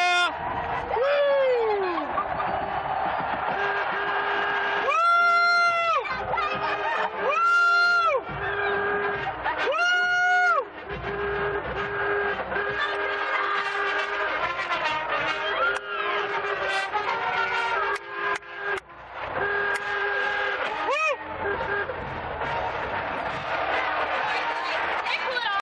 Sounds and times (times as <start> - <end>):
Music: 5.6 - 25.6
Speech: 6.0 - 7.1, 24.3 - 25.6.